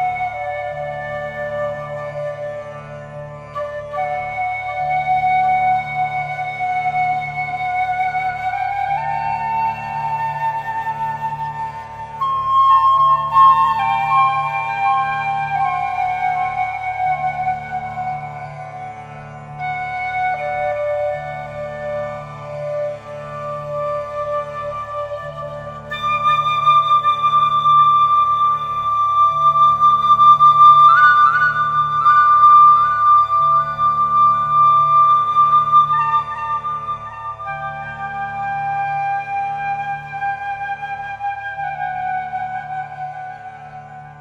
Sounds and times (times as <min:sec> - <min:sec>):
Flute: 0:00.0 - 0:44.2.